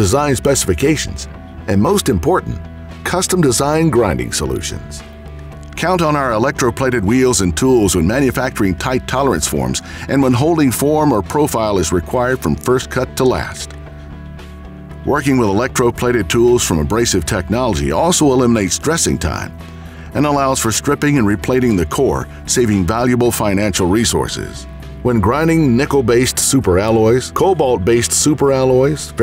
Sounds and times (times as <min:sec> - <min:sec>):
Speech: 0:00.0 - 0:05.1, 0:05.8 - 0:13.7, 0:15.0 - 0:19.6, 0:20.2 - 0:29.2
Music: 0:00.0 - 0:29.2.